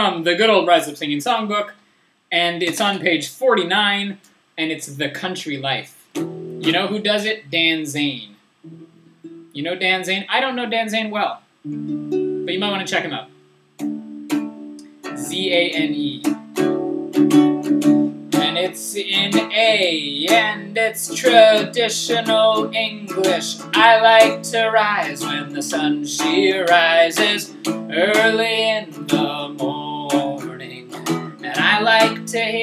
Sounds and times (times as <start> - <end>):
Music: 6.2 - 6.9, 8.7 - 9.6, 11.7 - 32.6
Male singing: 15.2 - 16.3, 18.4 - 32.6.